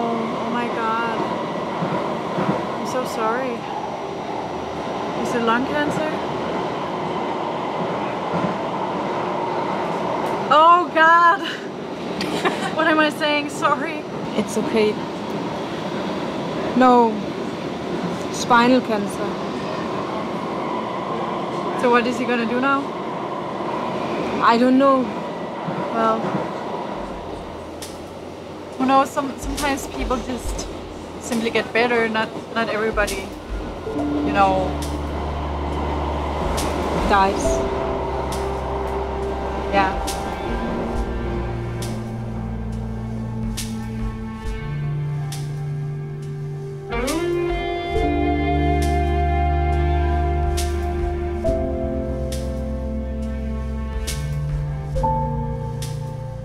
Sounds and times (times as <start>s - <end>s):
Railroad car, train wagon: 0.0s - 56.4s
Subway, metro, underground: 0.0s - 56.4s
Train: 0.0s - 56.4s.